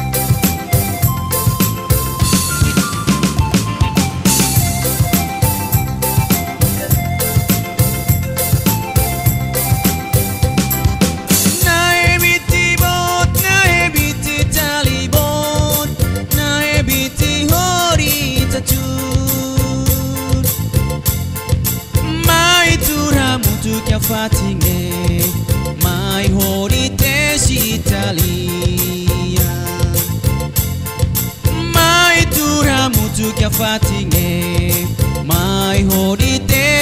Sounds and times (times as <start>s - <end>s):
Music: 0.0s - 36.8s.